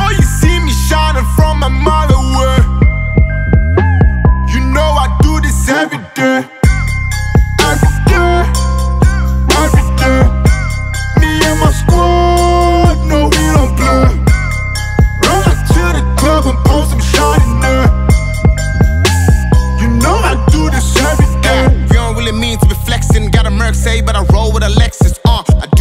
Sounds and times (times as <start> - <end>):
Music: 0.0 - 25.8.